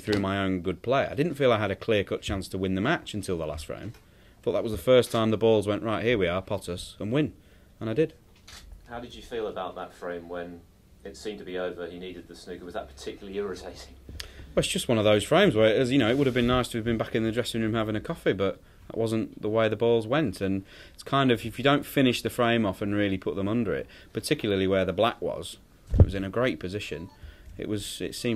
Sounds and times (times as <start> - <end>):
Speech: 0.0 - 8.2, 8.9 - 14.0, 14.6 - 28.3.